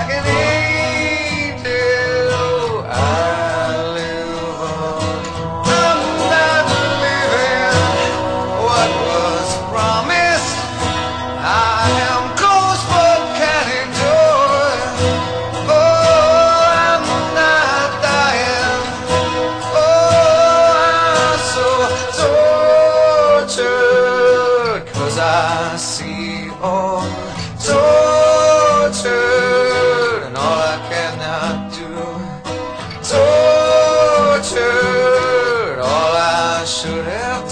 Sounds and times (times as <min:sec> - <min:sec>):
Country: 0:00.0 - 0:37.5.